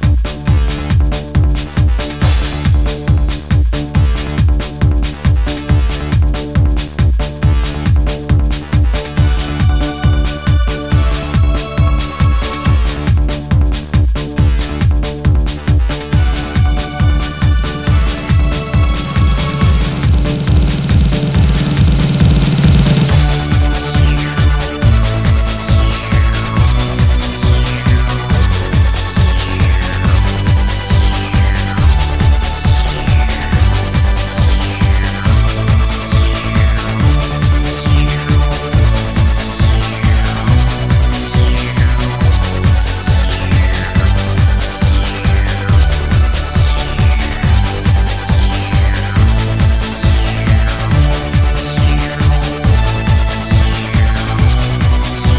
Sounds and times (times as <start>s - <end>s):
Techno: 0.0s - 55.3s.